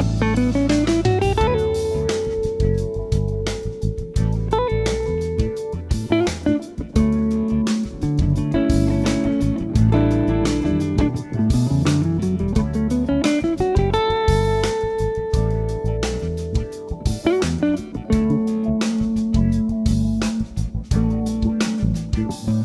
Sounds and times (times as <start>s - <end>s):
Acoustic guitar: 0.0s - 22.6s
Electric guitar: 0.0s - 22.6s
Jazz: 0.0s - 22.6s
Strum: 0.0s - 22.6s.